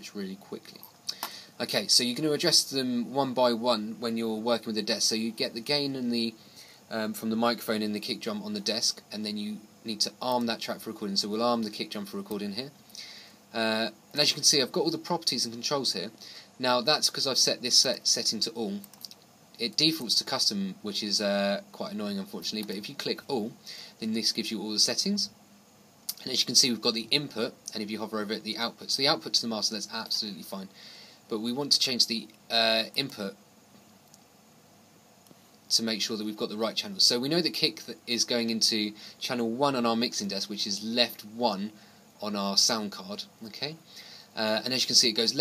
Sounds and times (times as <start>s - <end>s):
Speech: 0.0s - 0.9s, 1.6s - 12.8s, 13.5s - 25.4s, 26.1s - 30.7s, 31.3s - 33.4s, 35.7s - 43.8s, 44.4s - 45.4s.